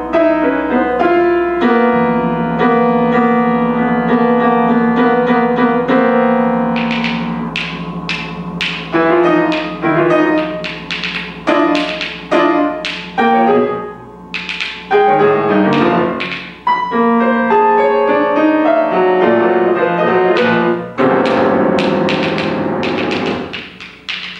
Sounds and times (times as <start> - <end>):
Jazz: 0.0 - 24.3
Timpani: 0.0 - 24.3.